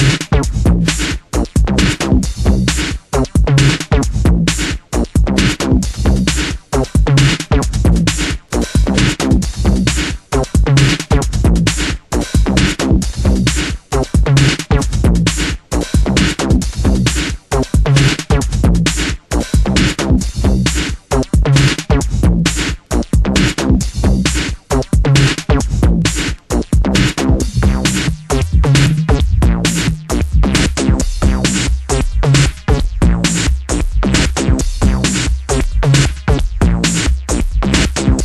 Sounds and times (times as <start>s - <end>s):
Music: 0.0s - 38.2s.